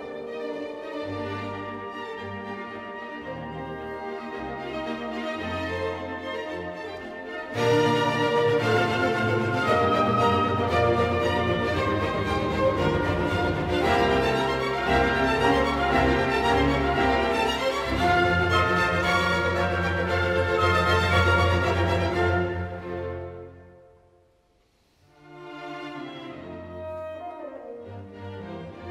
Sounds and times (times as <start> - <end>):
Music: 0.0 - 28.9.